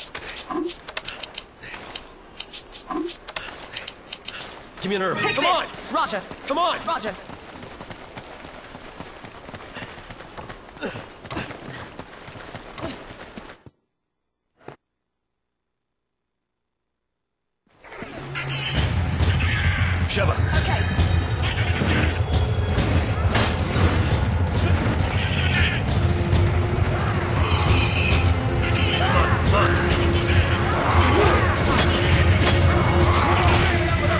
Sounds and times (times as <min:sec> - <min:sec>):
Run: 0:04.2 - 0:13.8
Music: 0:18.3 - 0:34.1.